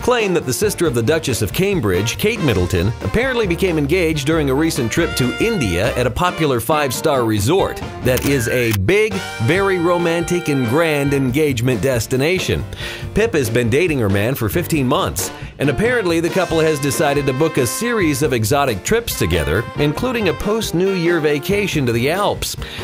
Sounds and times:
Speech: 0:00.0 - 0:22.6
Music: 0:00.0 - 0:22.8.

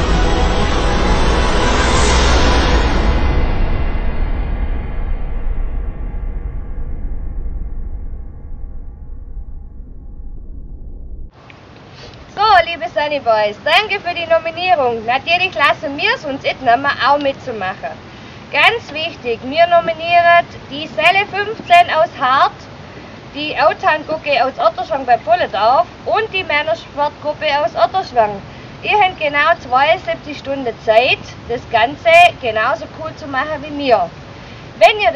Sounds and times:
Speech: 0:12.3 - 0:22.7, 0:23.4 - 0:34.2, 0:34.8 - 0:35.1.

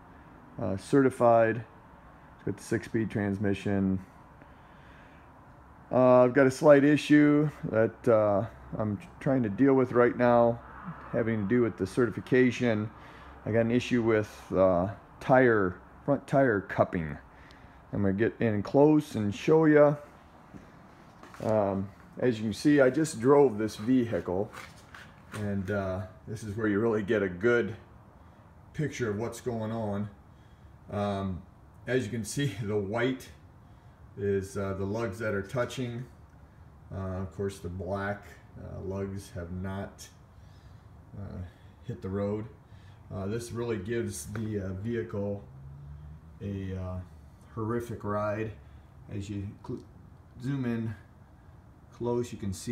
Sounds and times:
Speech: 0:00.6 - 0:01.7, 0:02.4 - 0:04.1, 0:05.9 - 0:17.3, 0:17.9 - 0:20.1, 0:21.4 - 0:24.7, 0:25.3 - 0:27.9, 0:28.8 - 0:30.2, 0:30.9 - 0:33.4, 0:34.2 - 0:36.1, 0:36.9 - 0:40.2, 0:41.1 - 0:45.5, 0:46.4 - 0:51.1, 0:51.9 - 0:52.7.

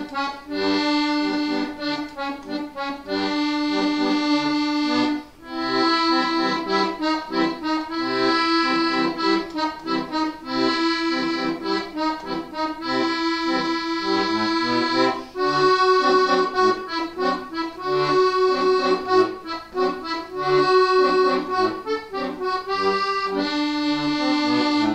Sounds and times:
Accordion: 0:00.0 - 0:24.9.

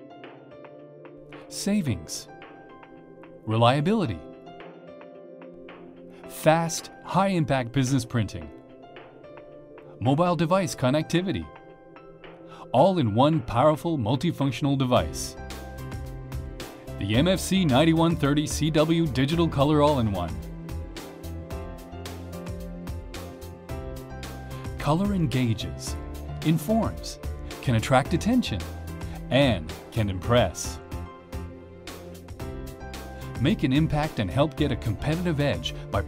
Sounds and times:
Music: 0:00.0 - 0:36.0
Speech: 0:01.5 - 0:02.3, 0:03.5 - 0:04.3, 0:06.4 - 0:08.5, 0:10.0 - 0:11.5, 0:12.7 - 0:15.4, 0:17.0 - 0:20.4, 0:24.8 - 0:28.7, 0:29.3 - 0:30.8, 0:33.4 - 0:36.0.

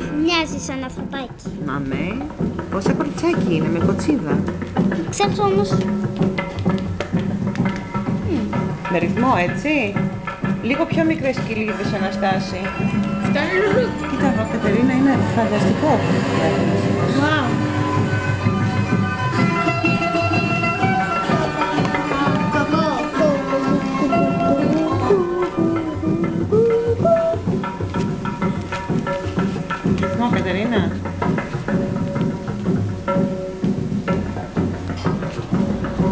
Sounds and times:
Music: 0:00.0 - 0:36.1.

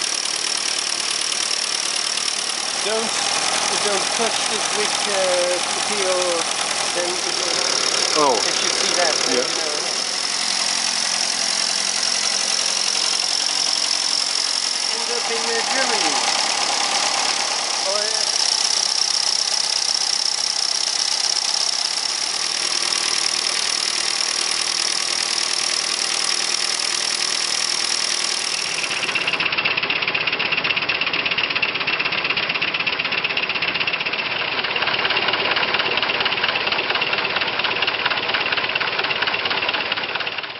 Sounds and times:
Speech: 0:02.8 - 0:07.6, 0:08.2 - 0:09.9, 0:14.9 - 0:16.2, 0:17.8 - 0:18.3.

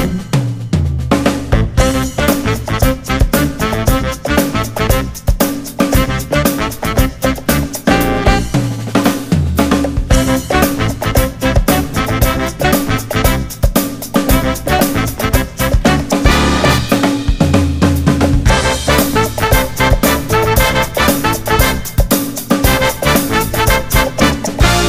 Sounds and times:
Music: 0:00.0 - 0:24.8.

